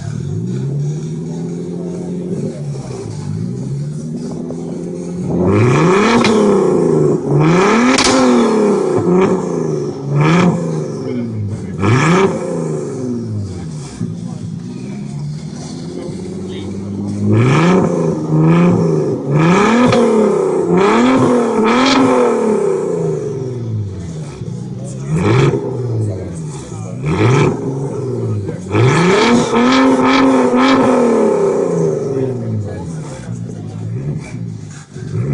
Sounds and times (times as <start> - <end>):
Speech: 1.2 - 3.6, 10.4 - 12.4, 13.4 - 17.8, 24.0 - 29.6, 31.9 - 35.3.